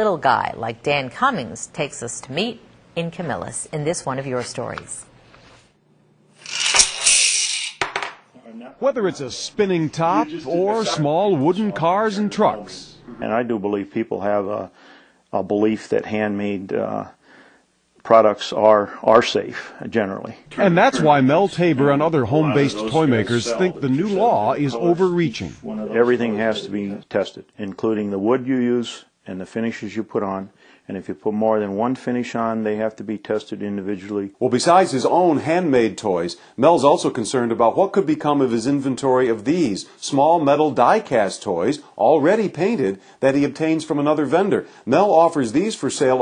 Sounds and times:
Speech: 0:08.4 - 0:17.2, 0:18.0 - 0:46.2.

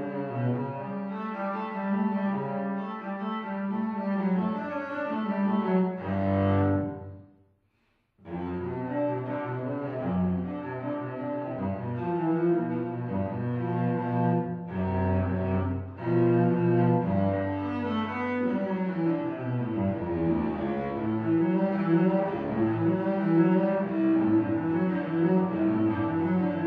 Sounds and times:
Cello: 0:00.0 - 0:07.3, 0:08.2 - 0:26.6.

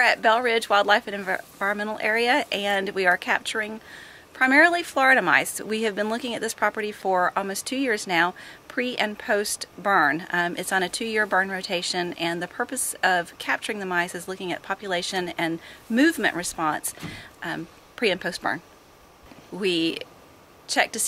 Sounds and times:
Speech: 0:00.0 - 0:18.6, 0:19.5 - 0:20.0, 0:20.7 - 0:21.0.

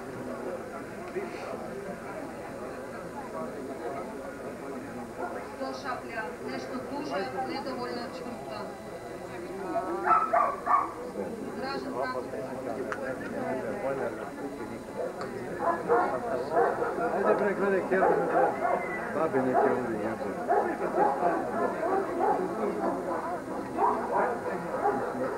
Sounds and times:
Speech: 0:00.0 - 0:25.3
Bow-wow: 0:10.0 - 0:11.0, 0:15.6 - 0:17.4, 0:18.0 - 0:23.0, 0:23.8 - 0:25.3.

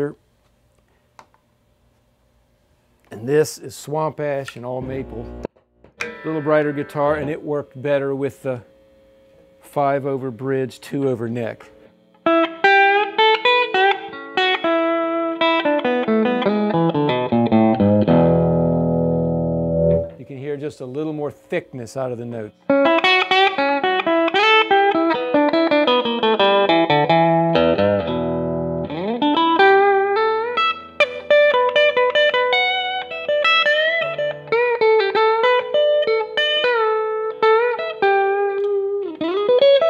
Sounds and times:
Speech: 0:00.0 - 0:00.2, 0:03.1 - 0:05.4, 0:06.2 - 0:08.7, 0:09.6 - 0:11.8, 0:20.2 - 0:22.6
Effects unit: 0:04.4 - 0:10.2, 0:11.0 - 0:20.5, 0:22.4 - 0:39.8
Electric guitar: 0:04.8 - 0:07.9, 0:11.8 - 0:20.2, 0:22.6 - 0:39.8.

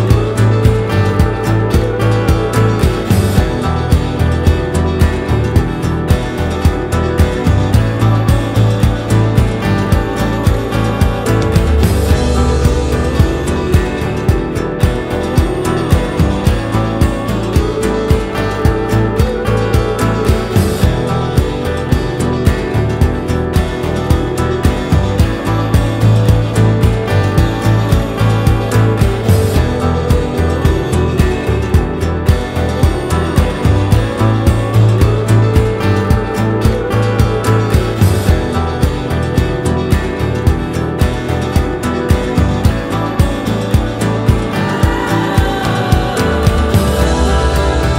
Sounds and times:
Music: 0:00.0 - 0:47.9.

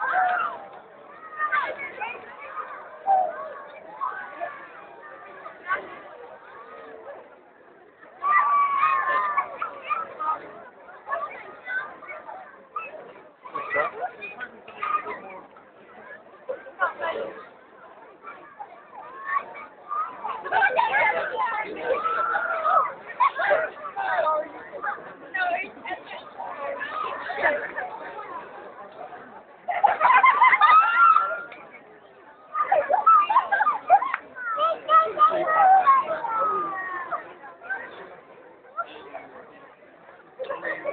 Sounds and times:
Outside, urban or manmade: 0:00.0 - 0:40.9
Speech: 0:00.0 - 0:40.9.

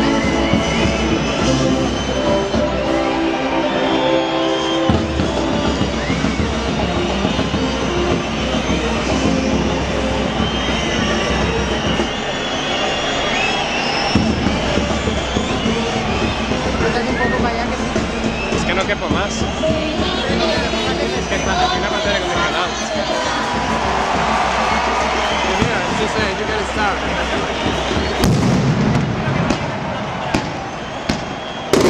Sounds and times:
Outside, urban or manmade: 0:00.0 - 0:31.9
Speech: 0:16.8 - 0:23.5, 0:25.5 - 0:28.2
Firecracker: 0:28.2 - 0:31.9.

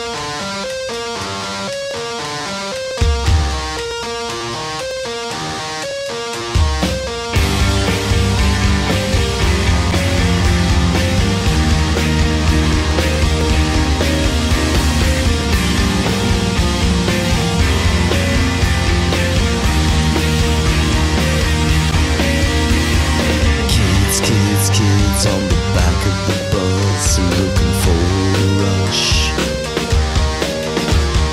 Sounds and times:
Blues: 0:00.0 - 0:31.3.

